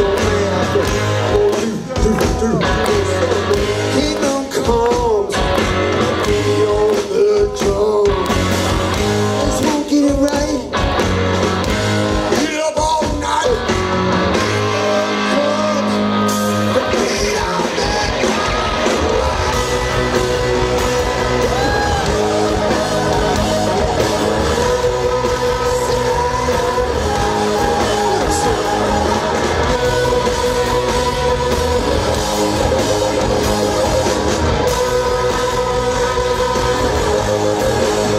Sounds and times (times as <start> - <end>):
Heavy metal: 0.0 - 38.1
Rock and roll: 0.0 - 38.1
Singing: 14.4 - 38.1.